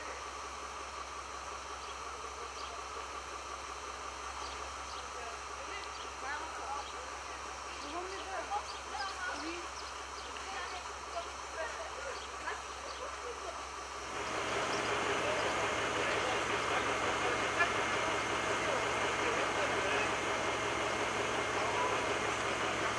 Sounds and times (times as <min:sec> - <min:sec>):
Speech: 0:05.0 - 0:13.7, 0:14.5 - 0:20.4, 0:21.2 - 0:22.9.